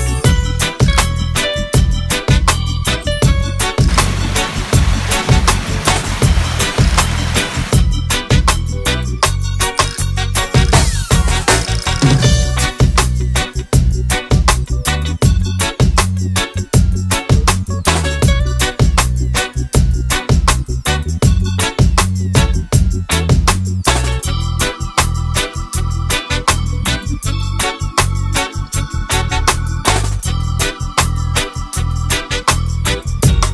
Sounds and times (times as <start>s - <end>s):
Music: 0.0s - 33.5s.